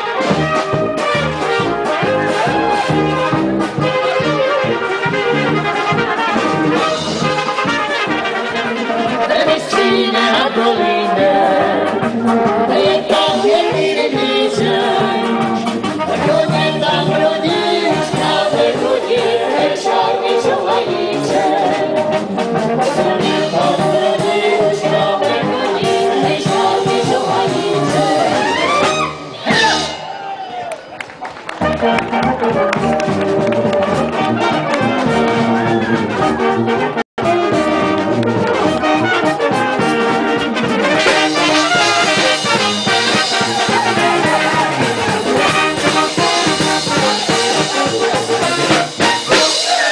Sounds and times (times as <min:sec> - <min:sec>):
Brass instrument: 0:00.0 - 0:49.9.